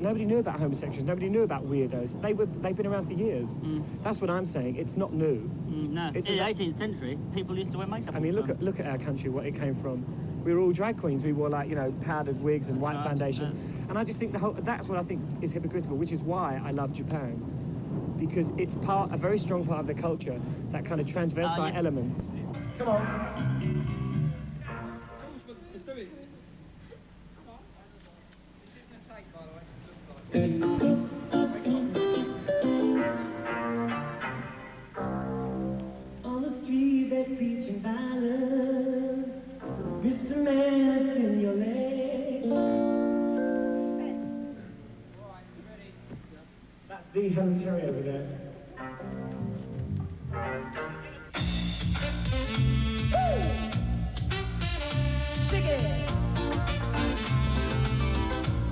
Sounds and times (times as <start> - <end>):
Music: 22.5 - 25.8, 30.3 - 45.0, 48.5 - 58.7.